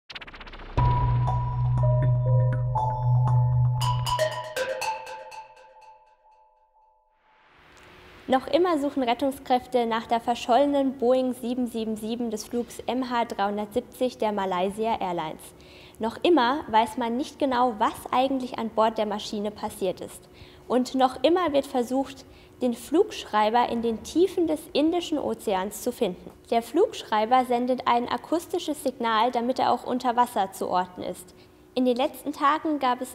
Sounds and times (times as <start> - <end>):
Music: 0.6 - 7.2
Speech: 8.3 - 33.1.